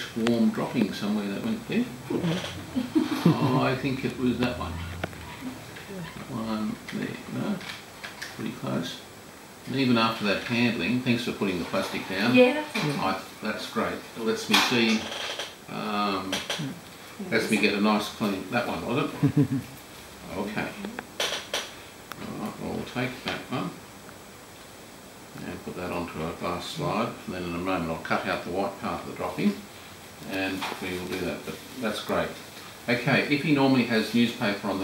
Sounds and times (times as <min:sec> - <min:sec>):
Speech: 0:00.0 - 0:02.5, 0:03.3 - 0:04.8, 0:05.9 - 0:07.7, 0:09.7 - 0:15.1, 0:15.7 - 0:19.2, 0:22.2 - 0:23.8, 0:25.4 - 0:29.6, 0:30.2 - 0:34.8.